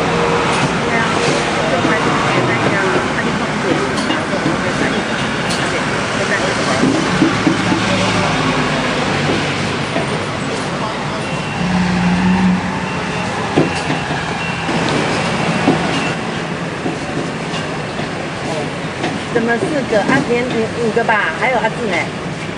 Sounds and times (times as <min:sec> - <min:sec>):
Speech: 0:00.8 - 0:11.6, 0:18.4 - 0:22.1.